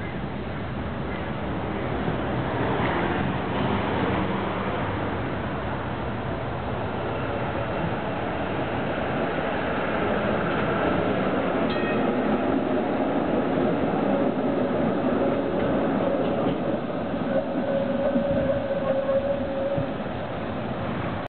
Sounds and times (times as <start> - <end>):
Vehicle: 0.0 - 13.3.